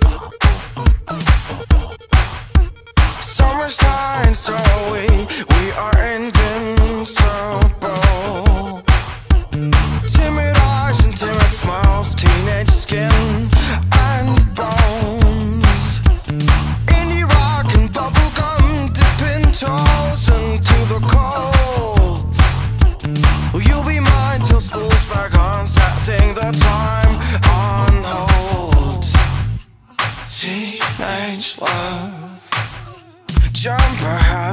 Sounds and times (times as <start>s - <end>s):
Music: 0.0s - 34.5s.